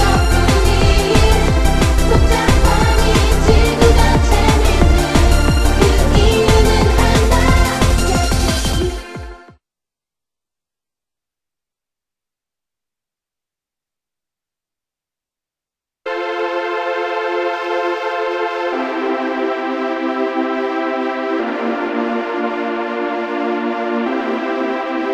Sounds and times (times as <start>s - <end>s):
Techno: 0.0s - 9.5s.